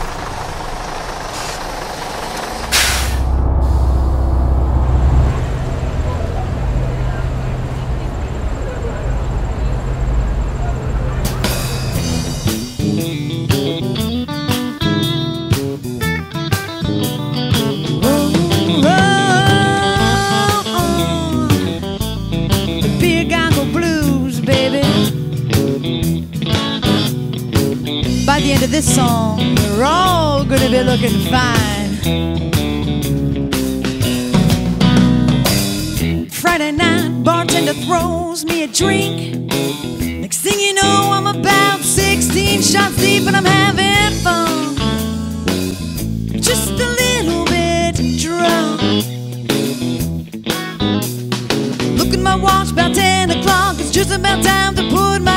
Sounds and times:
Blues: 5.9s - 55.3s
Rhythm and blues: 11.3s - 55.3s.

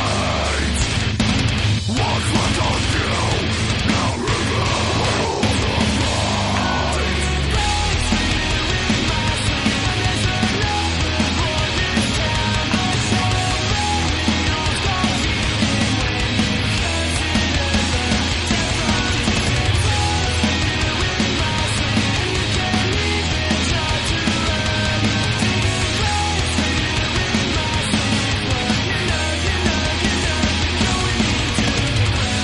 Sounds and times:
Music: 0.0s - 32.4s.

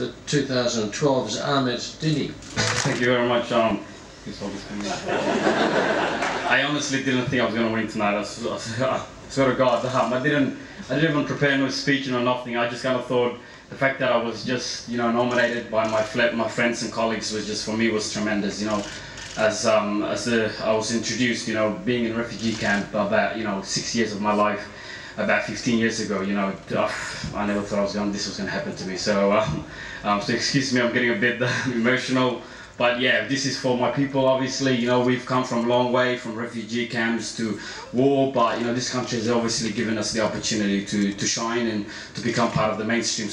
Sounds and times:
Male speech, man speaking: 0.0s - 5.2s, 6.5s - 43.3s
Narration, monologue: 0.0s - 43.3s.

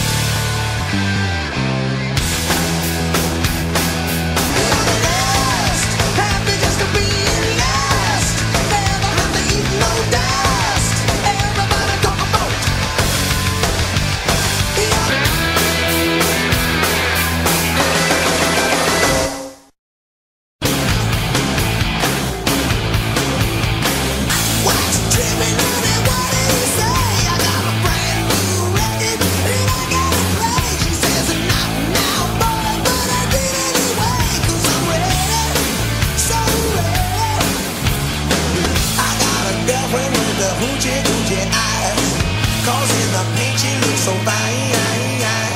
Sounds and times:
Heavy metal: 0.0s - 19.8s, 20.6s - 45.5s
Rock and roll: 0.0s - 19.8s, 20.6s - 45.5s.

